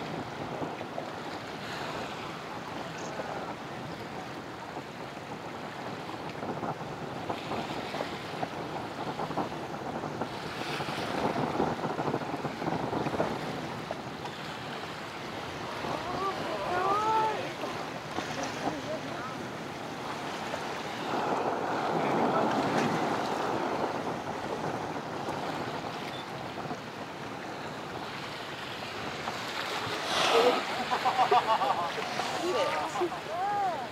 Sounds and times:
Boat, Water vehicle: 0.0s - 33.9s
Speech: 18.6s - 19.4s.

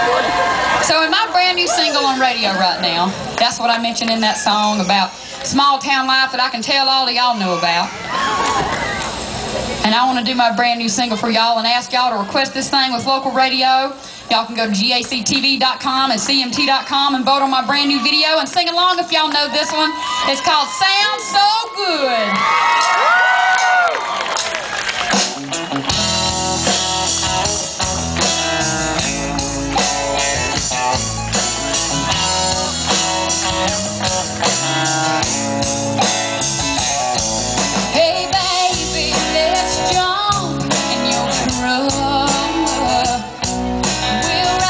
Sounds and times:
Music: 22.8s - 44.7s.

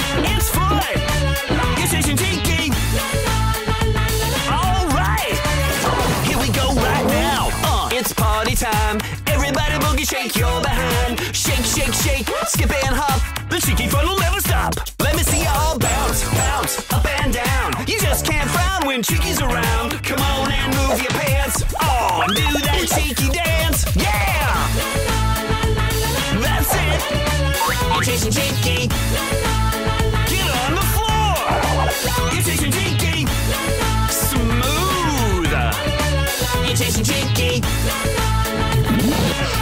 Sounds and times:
Funny music: 0.0s - 39.6s.

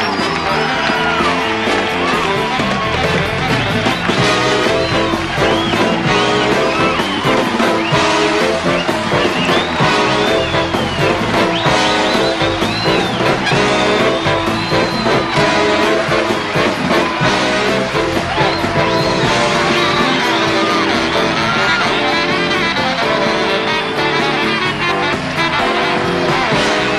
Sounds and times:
Music: 0.0s - 26.9s.

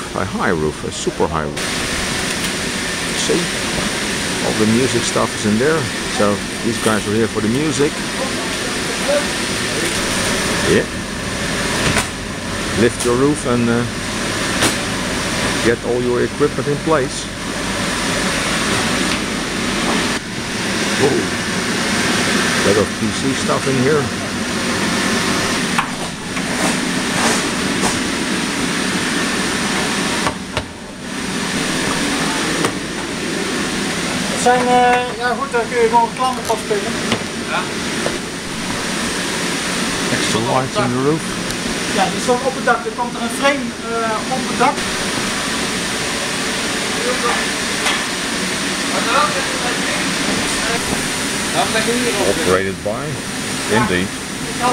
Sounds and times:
Speech: 0.0s - 1.6s, 3.2s - 3.5s, 4.4s - 9.3s, 10.6s - 10.9s, 12.7s - 13.9s, 15.6s - 17.3s, 22.6s - 24.2s, 34.3s - 37.8s, 40.1s - 41.3s, 41.9s - 44.8s, 51.6s - 54.7s
Vehicle: 0.0s - 54.7s.

